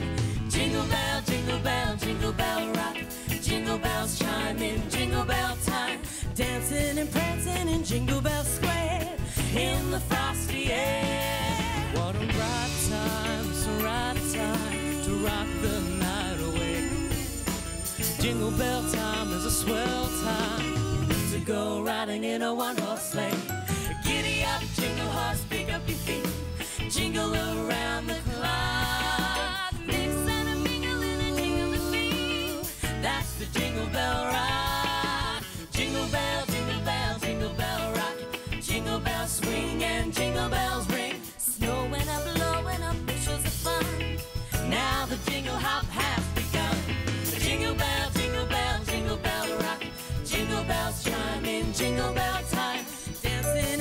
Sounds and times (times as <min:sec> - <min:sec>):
Music: 0:00.0 - 0:53.8.